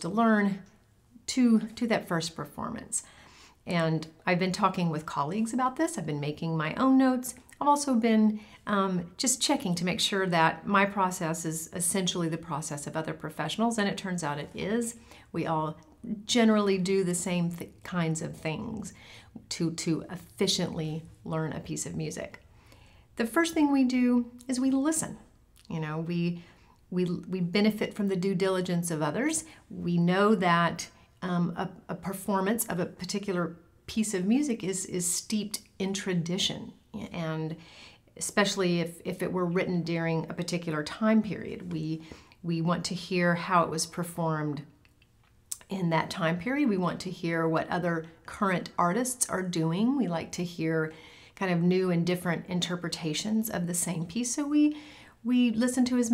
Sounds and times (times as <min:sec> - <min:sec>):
Speech: 0:00.0 - 0:03.1, 0:03.7 - 0:22.4, 0:23.2 - 0:37.6, 0:38.2 - 0:44.8, 0:45.5 - 0:56.1.